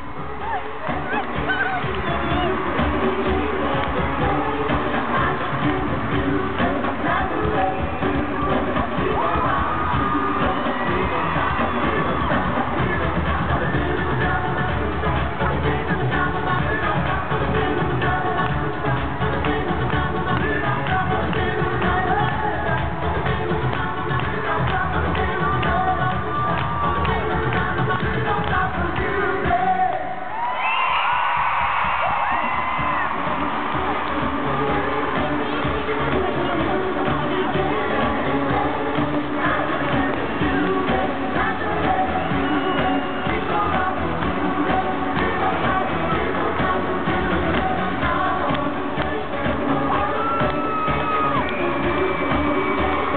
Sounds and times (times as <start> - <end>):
Music: 0.0 - 53.1.